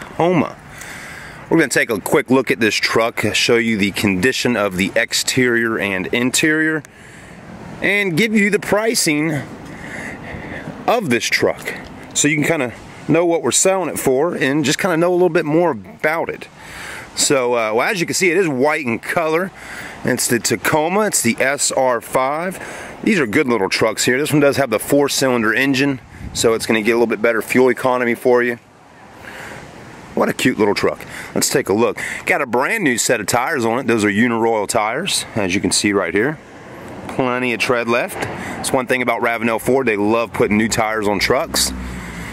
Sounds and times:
Speech: 0.0 - 0.6, 1.5 - 6.9, 7.8 - 9.5, 10.8 - 16.6, 17.2 - 28.6, 30.2 - 36.4, 37.1 - 41.8.

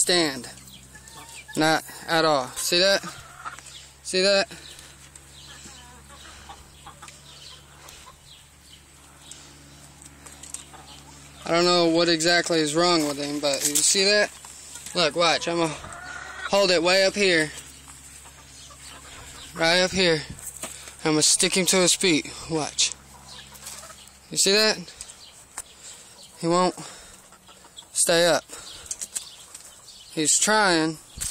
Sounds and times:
Speech: 0.0 - 0.6, 1.6 - 3.1, 11.4 - 14.3, 15.0 - 15.8, 16.5 - 17.6, 19.6 - 20.4, 21.0 - 23.0, 24.3 - 24.9, 26.4 - 26.9, 28.0 - 28.5, 30.2 - 31.0.

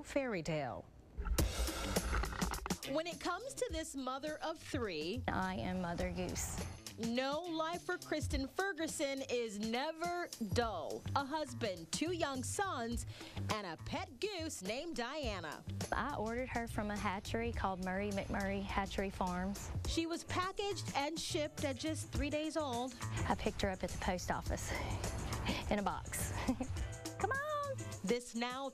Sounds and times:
Speech: 0.0 - 0.8, 2.8 - 24.9
Music: 1.2 - 28.7.

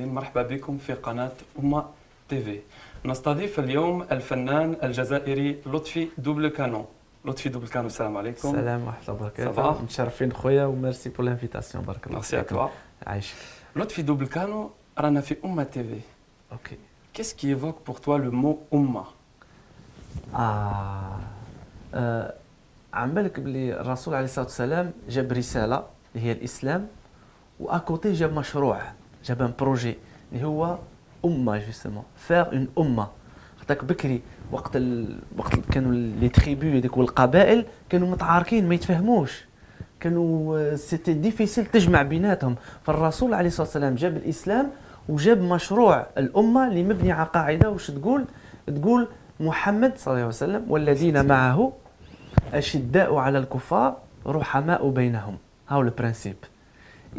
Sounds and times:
Speech: 0.0 - 19.2, 20.3 - 27.0, 27.6 - 51.8, 52.4 - 56.5.

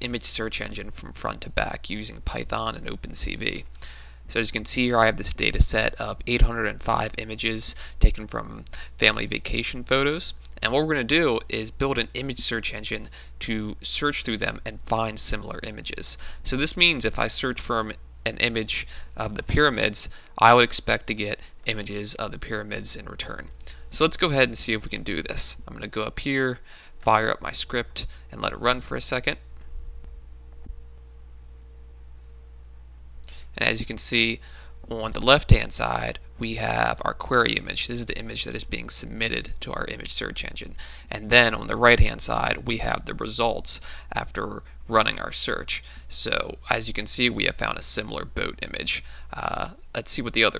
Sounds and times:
Speech: 0.0 - 3.7, 4.3 - 29.4, 33.6 - 50.6.

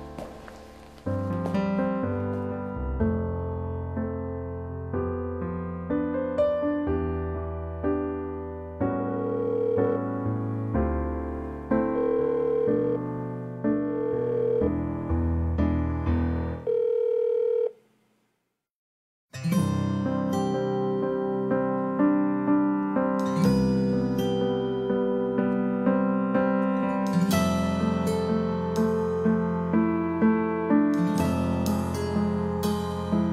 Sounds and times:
Music: 0.0 - 16.7, 19.3 - 33.3.

